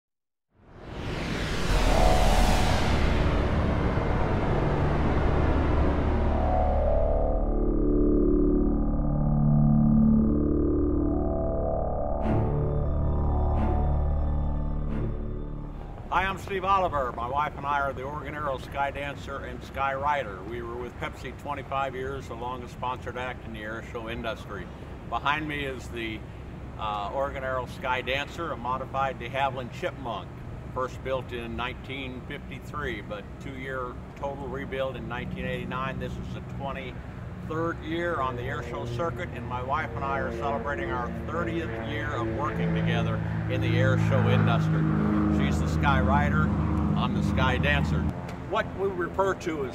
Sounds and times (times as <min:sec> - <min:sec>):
Aircraft: 0:00.6 - 0:49.7.